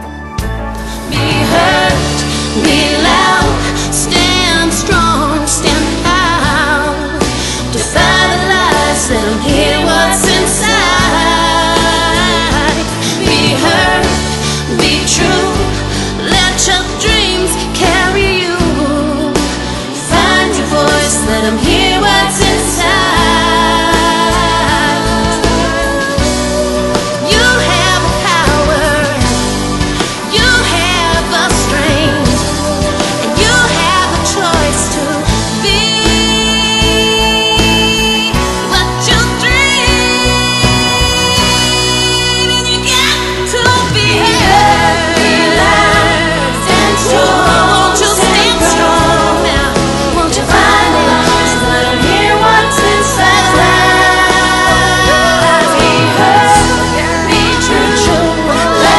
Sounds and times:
Music: 0.0s - 58.9s.

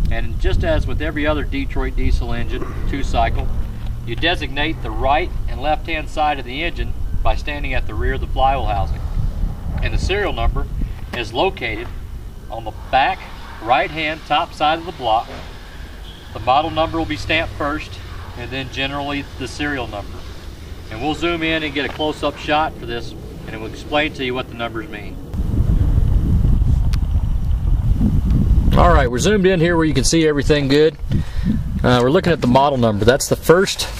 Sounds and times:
Heavy engine (low frequency): 0.0s - 29.1s
Speech: 0.1s - 3.5s, 4.1s - 9.0s, 9.8s - 11.9s, 12.5s - 15.4s, 16.4s - 20.1s, 20.9s - 25.2s, 28.7s - 31.0s, 31.8s - 33.9s.

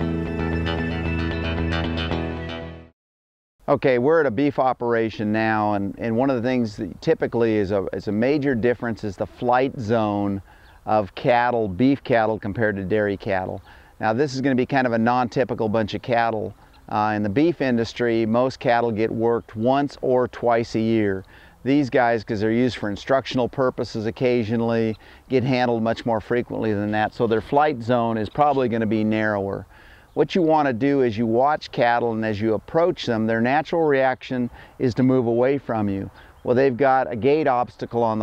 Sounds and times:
Speech: 3.7s - 38.2s.

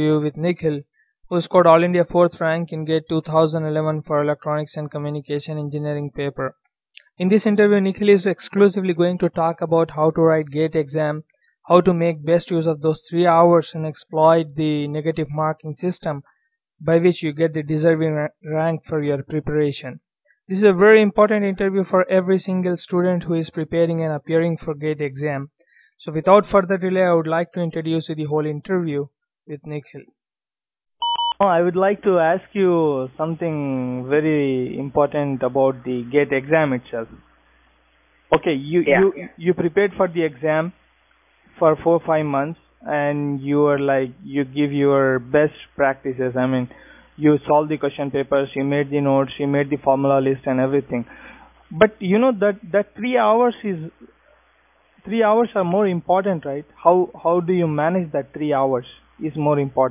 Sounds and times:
Speech: 0.0s - 16.2s, 16.8s - 30.1s, 31.4s - 37.2s, 38.4s - 40.8s, 41.6s - 51.1s, 51.7s - 54.1s, 55.1s - 59.9s.

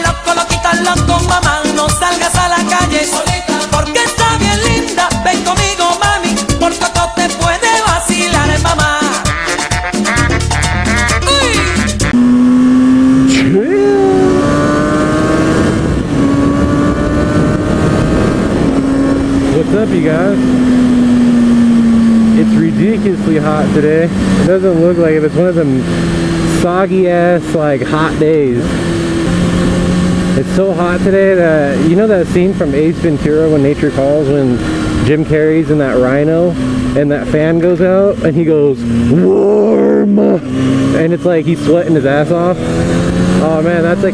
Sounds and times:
Music: 0.0s - 12.2s.

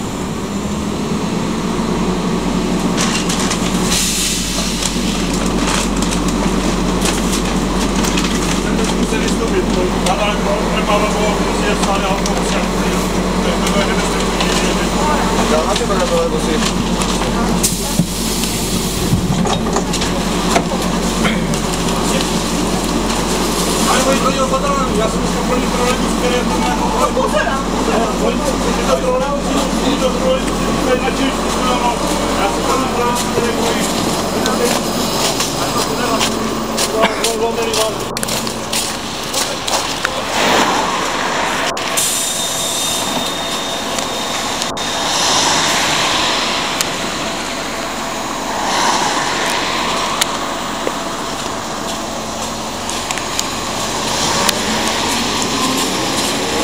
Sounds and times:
Bus: 0.0s - 56.6s.

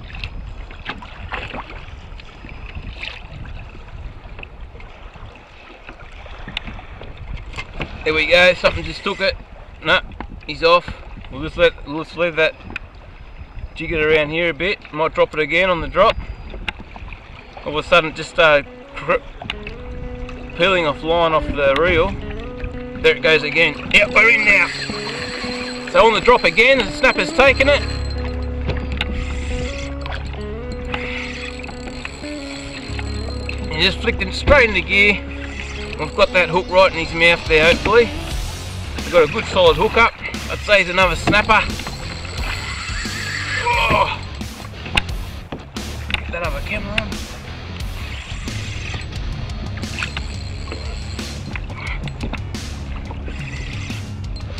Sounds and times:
Rowboat, canoe, kayak: 0.0s - 54.5s
Speech: 8.0s - 12.6s, 13.8s - 16.1s, 17.7s - 19.2s, 20.6s - 22.1s, 23.1s - 24.7s, 25.9s - 27.8s, 33.7s - 35.2s, 36.0s - 38.1s, 39.0s - 41.7s, 46.3s - 47.1s.

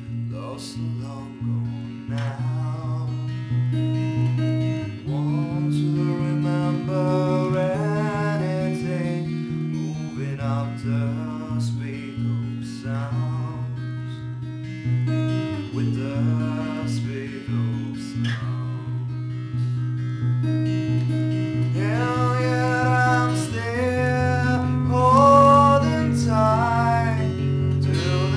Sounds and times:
Music: 0.0s - 28.3s.

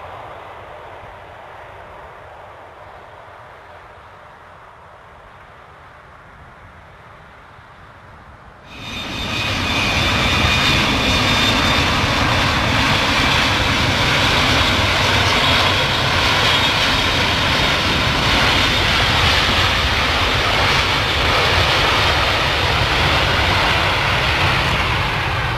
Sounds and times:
Fixed-wing aircraft, airplane: 0.0s - 25.5s
Jet engine: 0.0s - 25.5s.

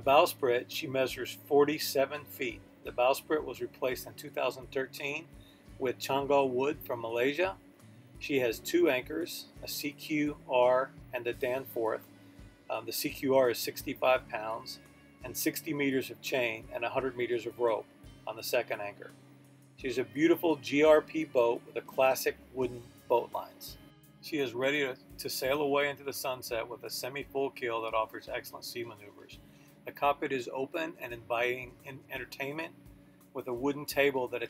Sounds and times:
Speech: 0.0s - 7.6s, 8.2s - 12.0s, 12.7s - 19.1s, 19.8s - 32.7s, 33.4s - 34.5s
Music: 0.0s - 34.5s.

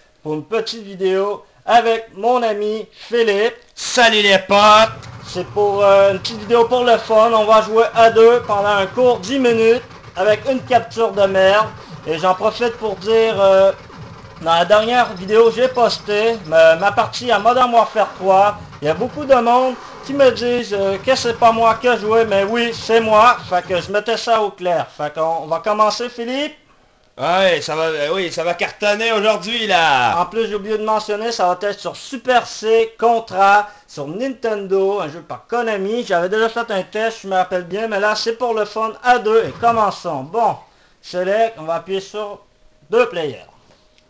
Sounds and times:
Speech: 0.2s - 13.8s, 14.4s - 26.6s, 27.2s - 43.6s.

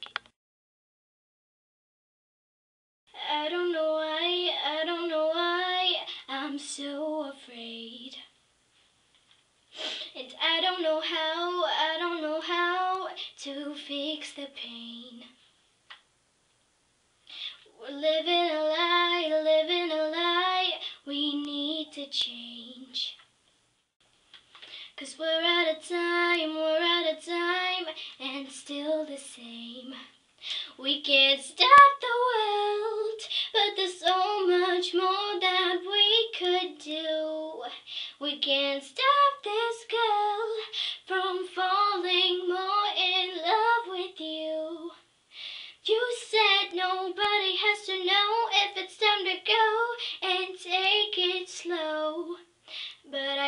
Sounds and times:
Child singing: 3.2s - 8.3s, 10.1s - 15.4s, 17.7s - 23.2s, 25.0s - 30.1s, 30.8s - 45.0s, 45.8s - 52.5s, 53.1s - 53.4s.

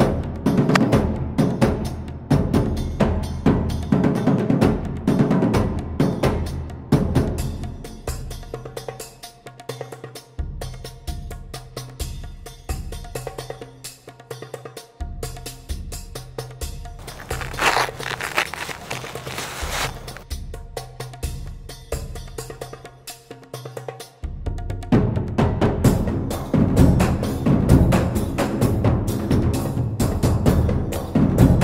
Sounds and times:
Music: 0.0s - 31.6s
Outside, rural or natural: 17.0s - 20.2s.

